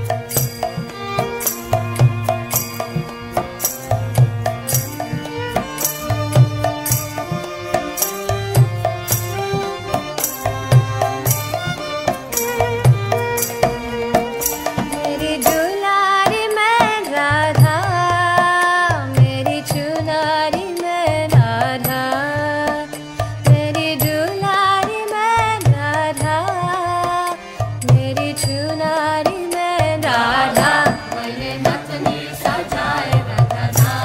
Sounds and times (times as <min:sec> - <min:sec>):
Traditional music: 0:00.0 - 0:16.5, 0:29.5 - 0:34.0
Tabla: 0:00.0 - 0:34.0.